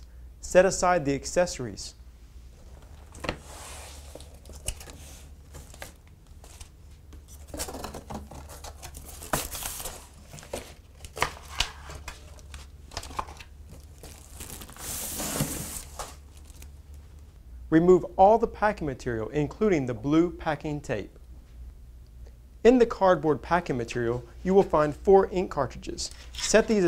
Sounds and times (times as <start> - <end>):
Speech: 0.4 - 2.0, 17.7 - 21.2, 22.6 - 26.8.